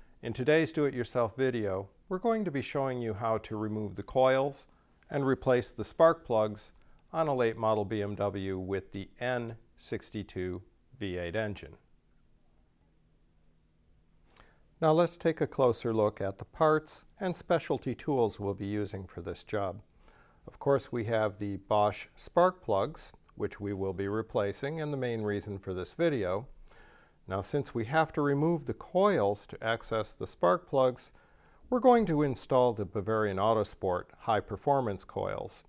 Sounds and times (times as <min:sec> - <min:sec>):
Speech: 0:00.2 - 0:11.9, 0:14.8 - 0:19.9, 0:20.5 - 0:26.6, 0:27.3 - 0:35.6.